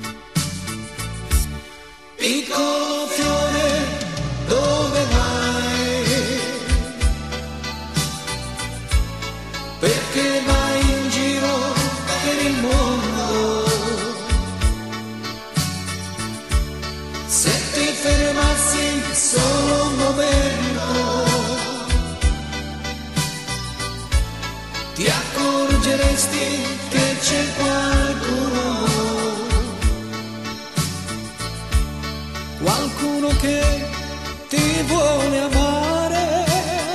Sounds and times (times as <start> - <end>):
Music: 0.0 - 36.9.